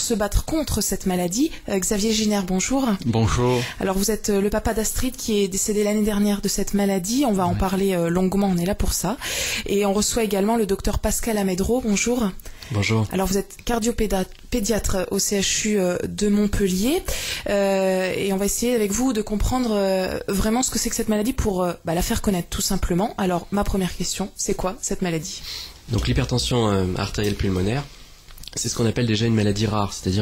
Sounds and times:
Speech: 0:00.0 - 0:08.9, 0:09.9 - 0:13.9, 0:25.9 - 0:27.9.

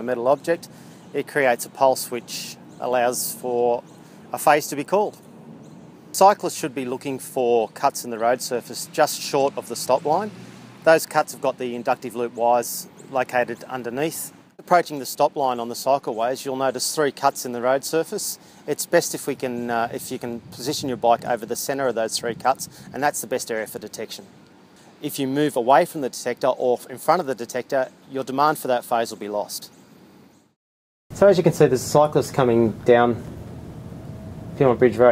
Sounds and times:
Speech: 0:00.0 - 0:05.2, 0:06.2 - 0:24.3, 0:25.0 - 0:29.8, 0:31.1 - 0:33.2, 0:34.6 - 0:35.1.

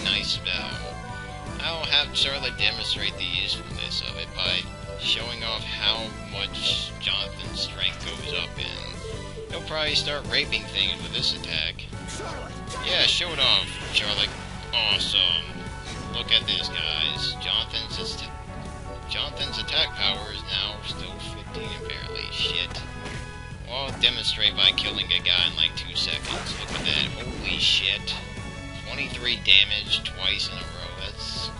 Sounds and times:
Speech: 0:00.0 - 0:00.9, 0:01.6 - 0:09.0, 0:09.6 - 0:18.3, 0:19.1 - 0:22.8, 0:23.7 - 0:31.5
Music: 0:00.0 - 0:31.5.

